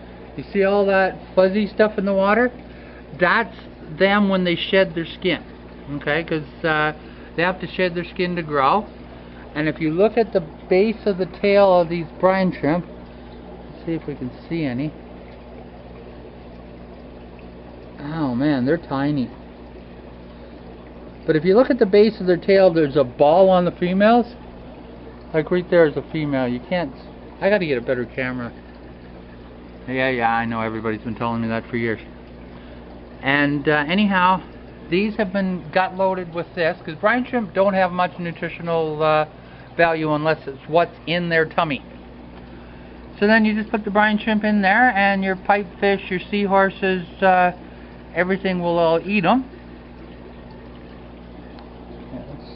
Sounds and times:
Speech: 0.4s - 2.6s, 3.2s - 8.9s, 9.6s - 12.9s, 13.8s - 15.0s, 18.0s - 19.4s, 21.3s - 24.4s, 25.3s - 28.6s, 29.9s - 32.1s, 33.2s - 41.9s, 43.2s - 47.6s, 48.2s - 49.5s, 52.1s - 52.5s.

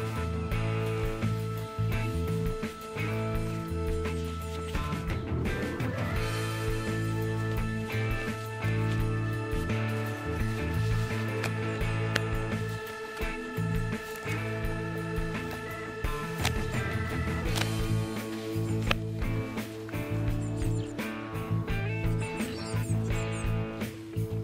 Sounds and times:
Music: 0.0s - 24.4s.

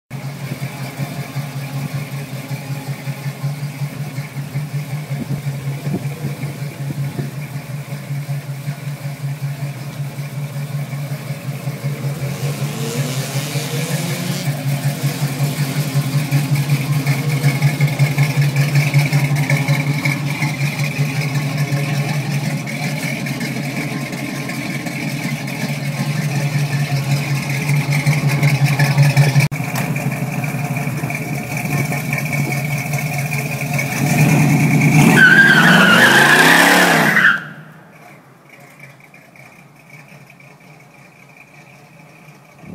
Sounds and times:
Car: 0.1s - 42.7s
Accelerating, revving, vroom: 12.0s - 15.9s, 34.0s - 37.4s.

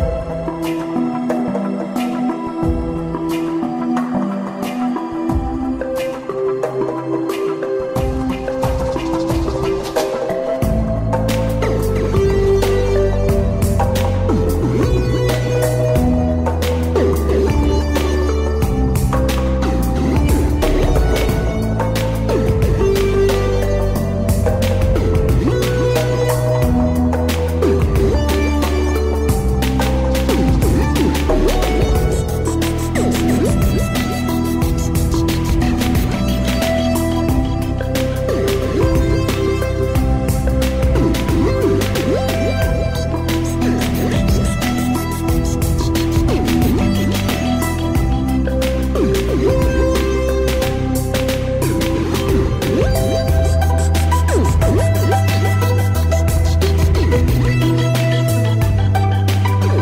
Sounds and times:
Music: 0.0s - 59.8s.

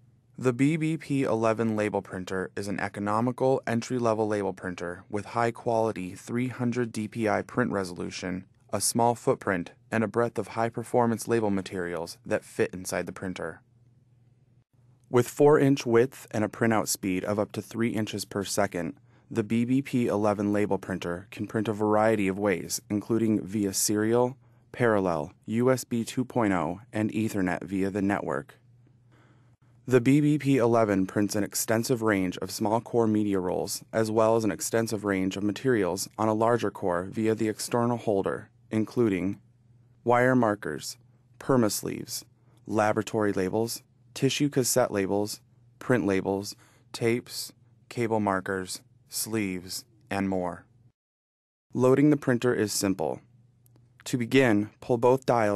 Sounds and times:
Speech: 0.4s - 13.6s, 15.1s - 28.6s, 29.9s - 39.4s, 40.1s - 50.7s, 51.7s - 53.3s, 54.0s - 55.5s.

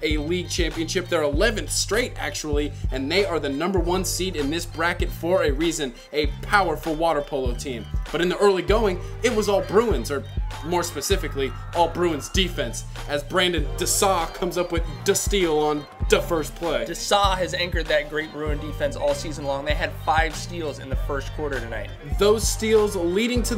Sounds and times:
Music: 0.0s - 23.5s
Speech: 0.0s - 23.5s.

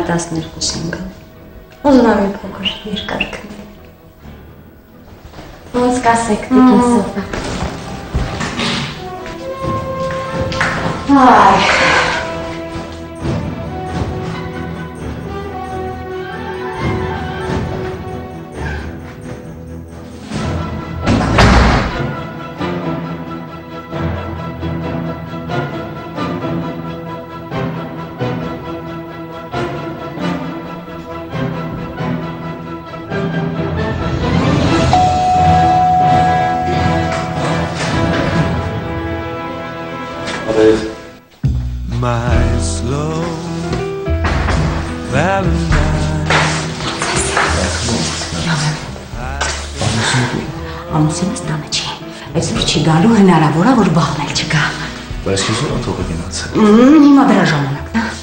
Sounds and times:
Music: 0.0s - 58.2s.

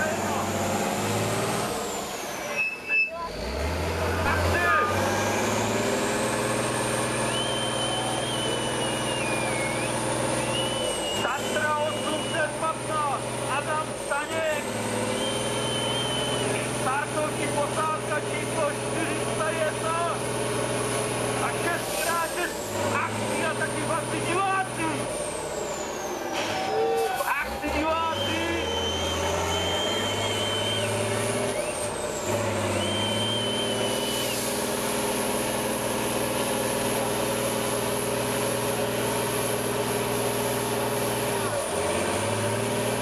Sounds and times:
Speech: 11.2s - 14.7s, 16.6s - 20.2s, 21.4s - 25.1s, 27.1s - 28.6s.

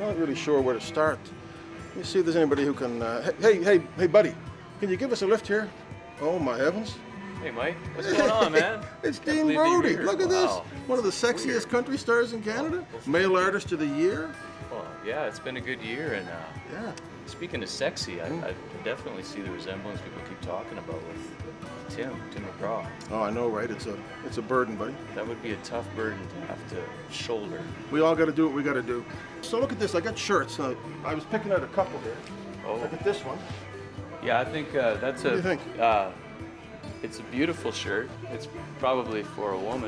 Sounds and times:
Music: 0.0s - 39.8s.

